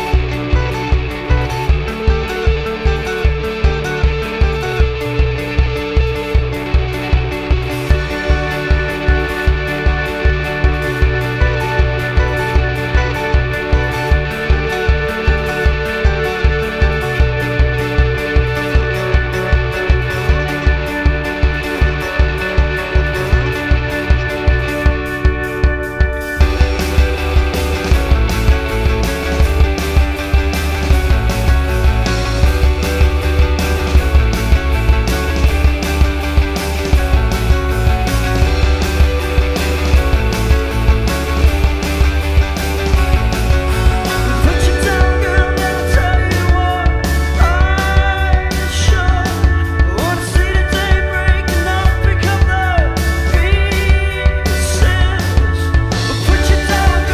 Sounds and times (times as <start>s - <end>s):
Music: 0.0s - 57.1s.